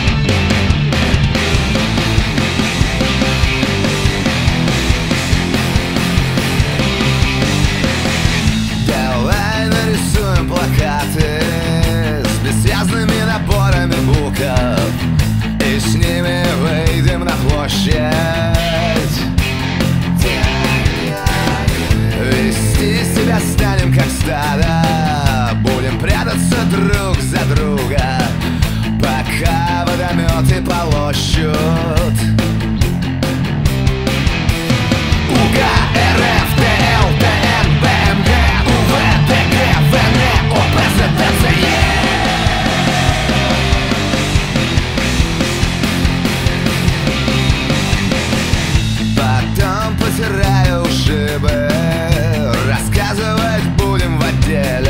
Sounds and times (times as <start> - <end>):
Music: 0.0 - 54.9.